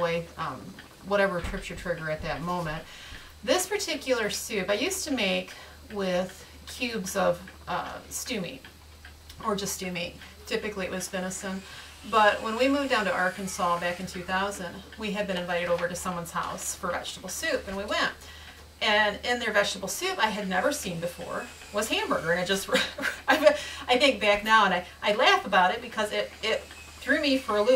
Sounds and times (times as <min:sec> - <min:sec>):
Speech: 0:00.0 - 0:08.6, 0:09.3 - 0:18.2, 0:18.8 - 0:27.7.